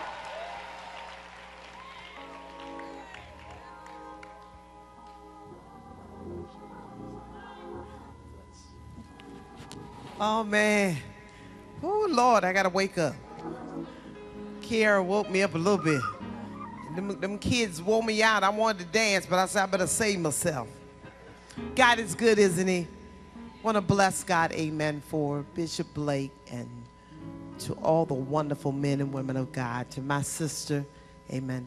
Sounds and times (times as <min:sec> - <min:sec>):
Music: 0:01.2 - 0:31.6.